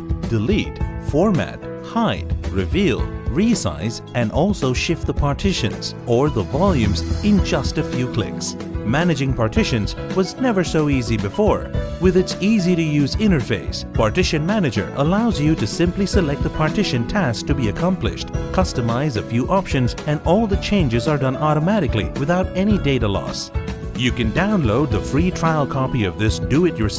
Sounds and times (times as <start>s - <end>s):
Music: 0.0s - 26.9s
Speech: 0.3s - 26.9s.